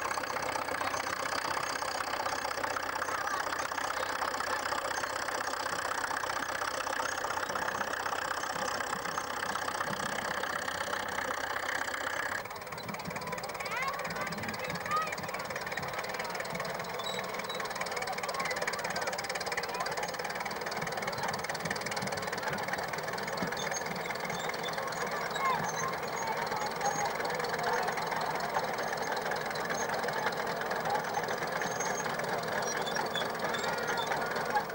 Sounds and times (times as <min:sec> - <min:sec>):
Speech: 0:03.0 - 0:04.8, 0:13.0 - 0:34.7.